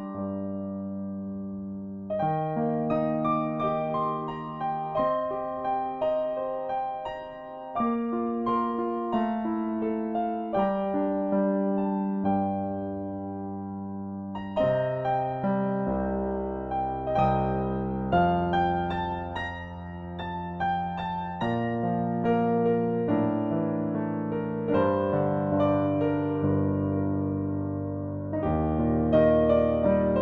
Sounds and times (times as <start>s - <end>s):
Music: 0.0s - 30.2s.